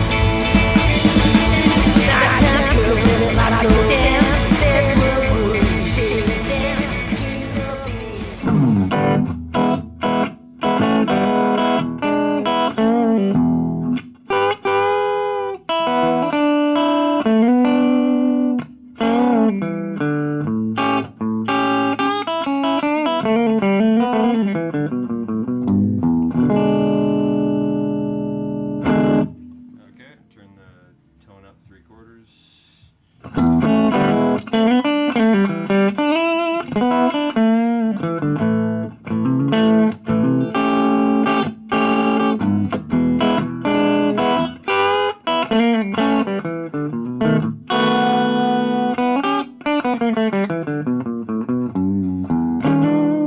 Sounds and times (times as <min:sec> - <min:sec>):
Electric guitar: 0:00.0 - 0:30.1, 0:33.2 - 0:53.2.